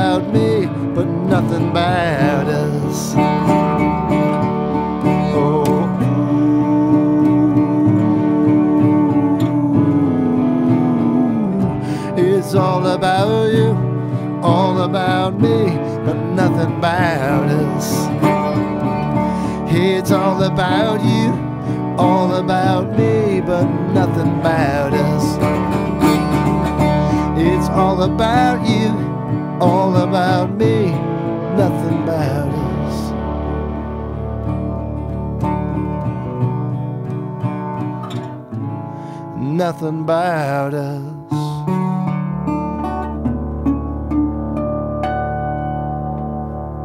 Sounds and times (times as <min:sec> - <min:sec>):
Acoustic guitar: 0:00.0 - 0:46.8.